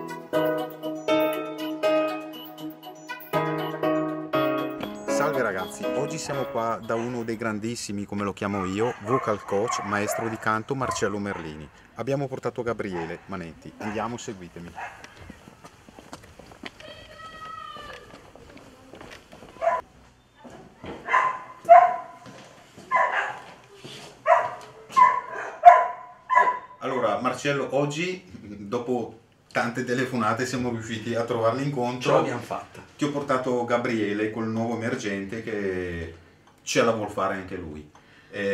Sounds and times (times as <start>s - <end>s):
Speech: 5.1s - 14.8s, 26.8s - 38.5s.